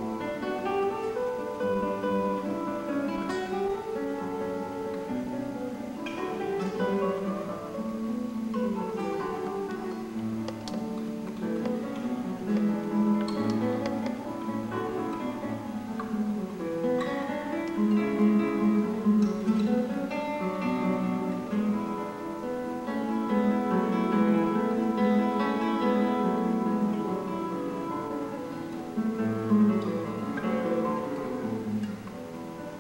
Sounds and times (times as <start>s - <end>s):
Acoustic guitar: 0.0s - 32.8s.